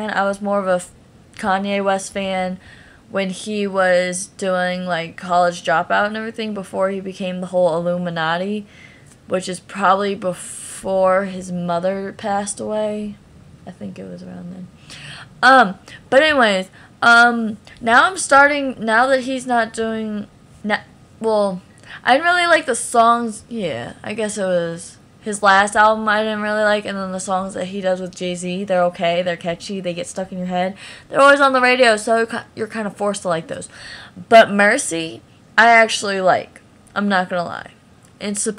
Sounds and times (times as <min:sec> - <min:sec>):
Speech: 0:00.0 - 0:08.7, 0:09.3 - 0:14.7, 0:15.4 - 0:38.5.